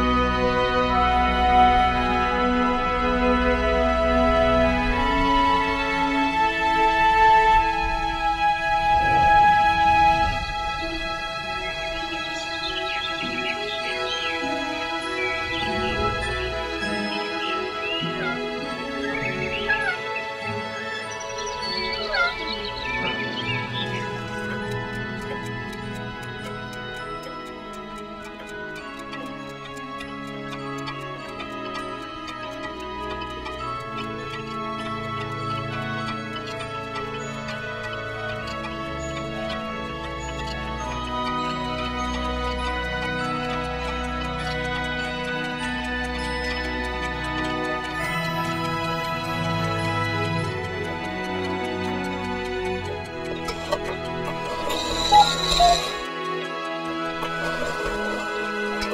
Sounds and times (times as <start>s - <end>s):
Music: 0.0s - 58.9s
Tick-tock: 24.2s - 36.7s.